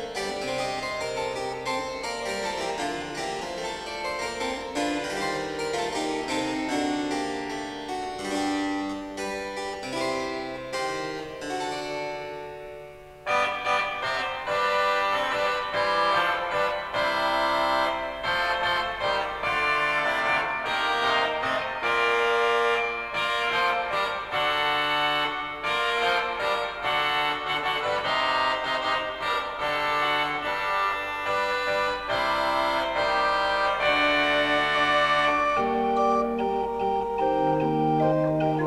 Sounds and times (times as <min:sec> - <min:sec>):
Harpsichord: 0:00.0 - 0:38.6.